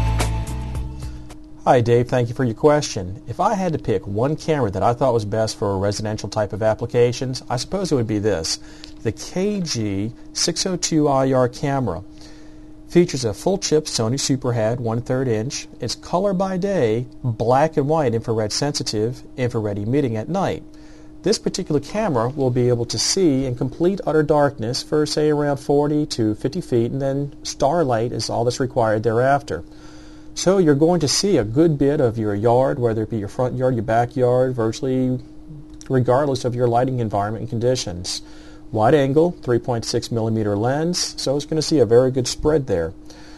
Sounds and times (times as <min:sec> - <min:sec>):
Speech: 0:01.6 - 0:12.1, 0:12.9 - 0:29.7, 0:30.4 - 0:43.0.